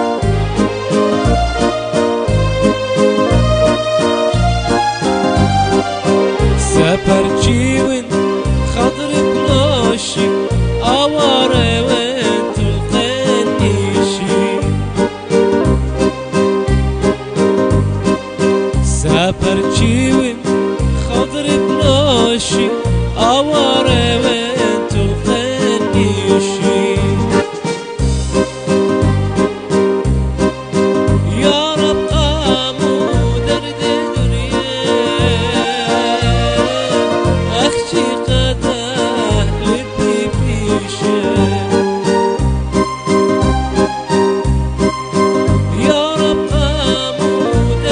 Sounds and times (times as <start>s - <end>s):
Background music: 0.0s - 47.9s
Soundtrack music: 0.0s - 47.9s.